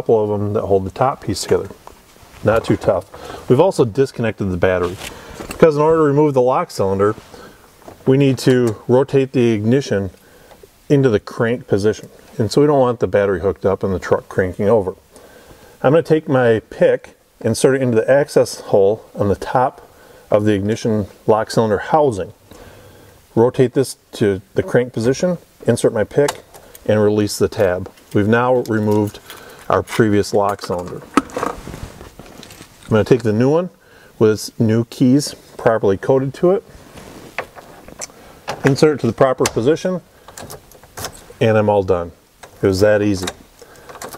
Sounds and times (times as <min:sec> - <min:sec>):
Speech: 0:00.0 - 0:01.8, 0:02.4 - 0:07.2, 0:08.0 - 0:10.2, 0:10.9 - 0:15.0, 0:15.8 - 0:22.4, 0:23.4 - 0:31.1, 0:32.9 - 0:36.7, 0:38.6 - 0:40.1, 0:41.4 - 0:43.4.